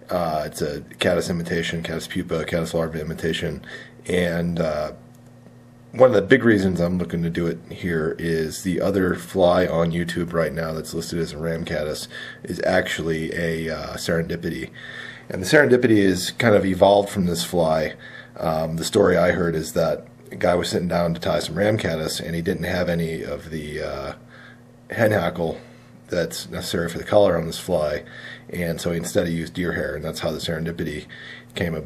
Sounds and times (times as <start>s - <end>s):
Speech: 0.0s - 5.0s, 5.9s - 24.2s, 24.9s - 31.8s.